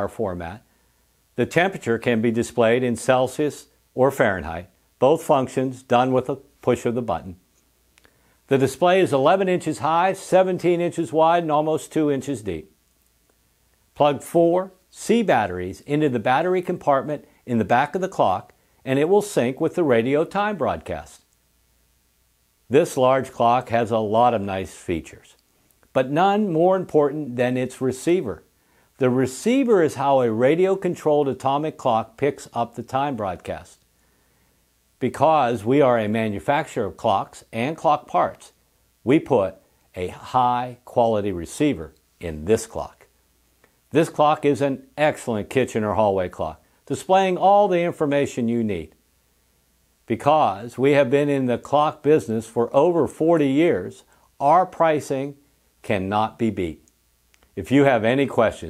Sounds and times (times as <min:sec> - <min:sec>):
Speech: 0:00.0 - 0:00.7, 0:01.4 - 0:07.5, 0:08.5 - 0:12.8, 0:14.0 - 0:21.3, 0:22.7 - 0:33.8, 0:35.0 - 0:43.1, 0:43.9 - 0:49.0, 0:50.1 - 0:56.9, 0:57.6 - 0:58.7.